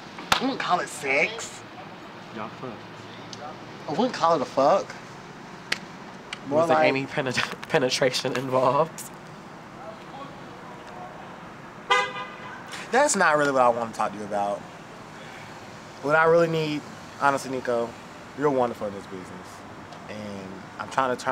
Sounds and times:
Speech: 16.0 - 21.3.

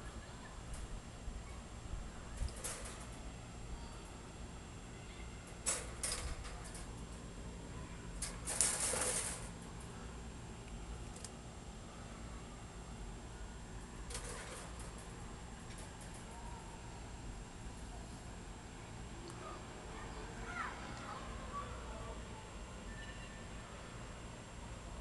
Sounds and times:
Speech: 0.0 - 0.8, 17.8 - 24.1.

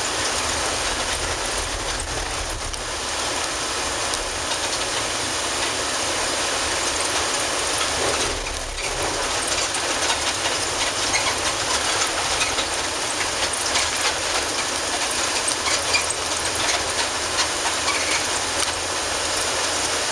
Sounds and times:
Bus: 0.0 - 20.1.

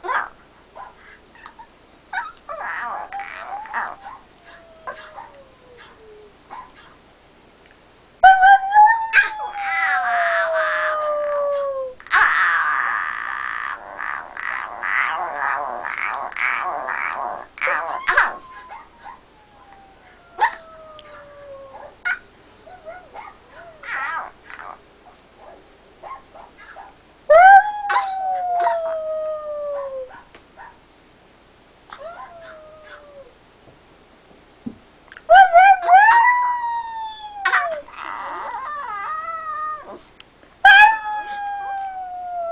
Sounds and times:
Howl: 2.5 - 6.4, 8.2 - 22.0, 27.3 - 30.2, 32.0 - 33.4, 35.3 - 40.0, 40.7 - 42.5.

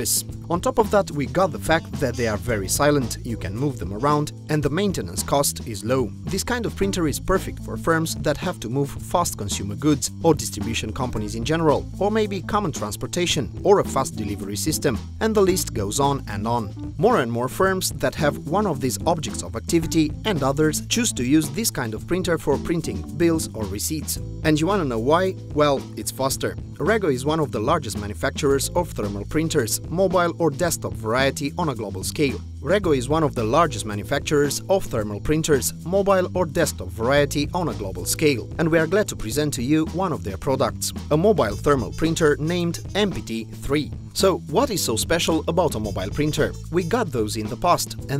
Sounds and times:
Music: 0.0 - 48.1
Speech: 0.0 - 48.1.

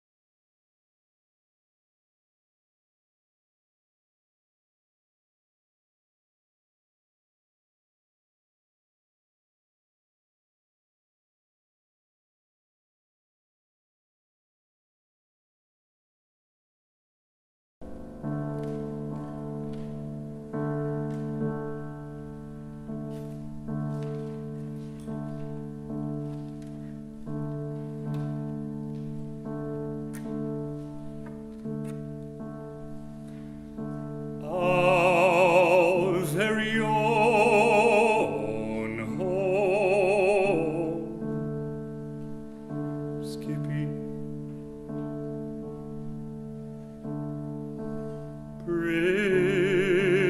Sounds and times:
Opera: 32.8 - 50.3.

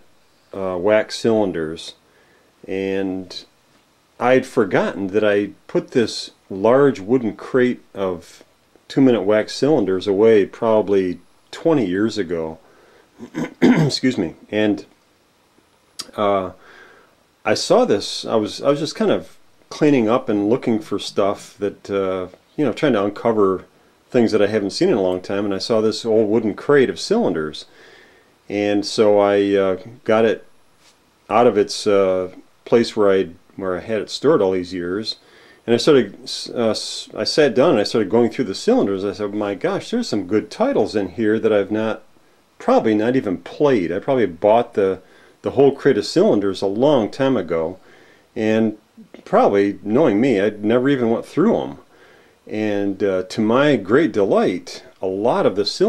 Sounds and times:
Speech: 0.0 - 2.0, 2.6 - 3.5, 4.2 - 12.6, 13.2 - 15.0, 16.0 - 16.6, 17.4 - 27.7, 28.5 - 30.5, 31.3 - 47.8, 48.4 - 51.9, 52.5 - 55.8.

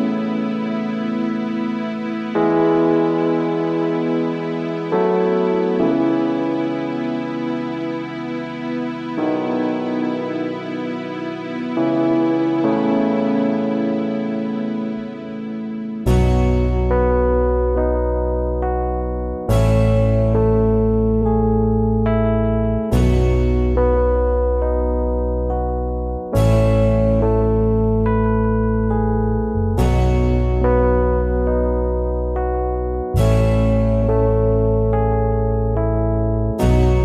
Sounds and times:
Music: 0.0 - 37.0.

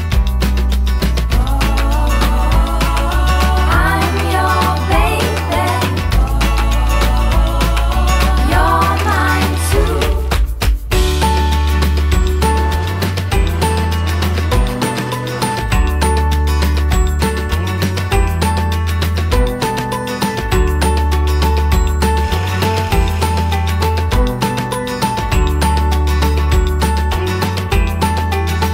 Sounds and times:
Music: 0.0 - 28.7.

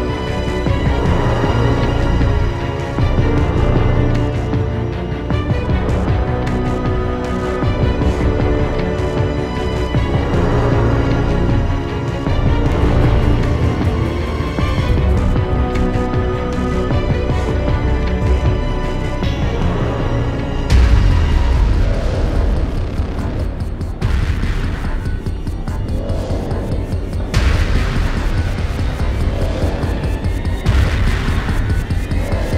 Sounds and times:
Soundtrack music: 0.0 - 32.5
Theme music: 0.0 - 32.5.

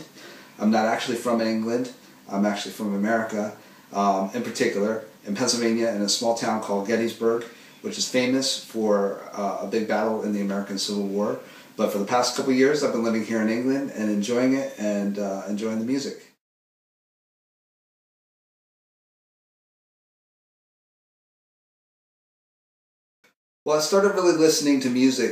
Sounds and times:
Speech: 0.0 - 16.4, 23.7 - 25.3.

